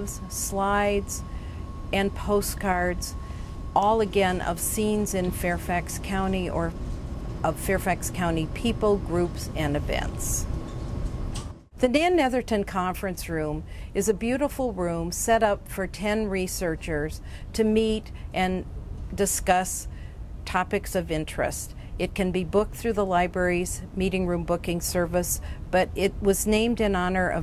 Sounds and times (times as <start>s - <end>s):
Speech: 0.0s - 1.2s, 2.0s - 3.2s, 3.8s - 6.8s, 7.4s - 10.5s, 11.8s - 19.9s, 20.5s - 27.4s.